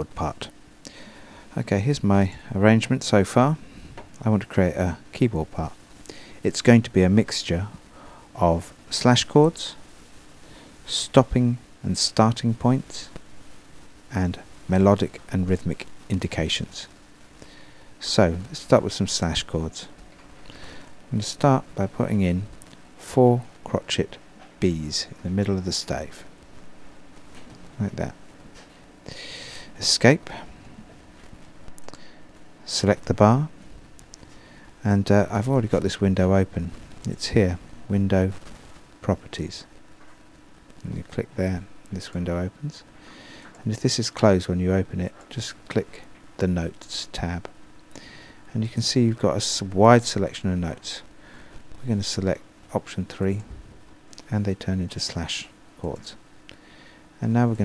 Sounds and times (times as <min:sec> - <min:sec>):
Speech: 0:00.0 - 0:00.5, 0:01.6 - 0:03.6, 0:04.2 - 0:05.8, 0:06.4 - 0:07.8, 0:08.4 - 0:09.8, 0:10.9 - 0:13.2, 0:14.1 - 0:17.0, 0:18.0 - 0:20.0, 0:21.1 - 0:26.3, 0:27.8 - 0:28.2, 0:29.8 - 0:30.5, 0:32.6 - 0:33.6, 0:34.8 - 0:38.4, 0:39.0 - 0:39.7, 0:40.8 - 0:42.9, 0:43.6 - 0:47.5, 0:48.5 - 0:51.1, 0:51.8 - 0:53.6, 0:54.2 - 0:56.2, 0:57.2 - 0:57.6.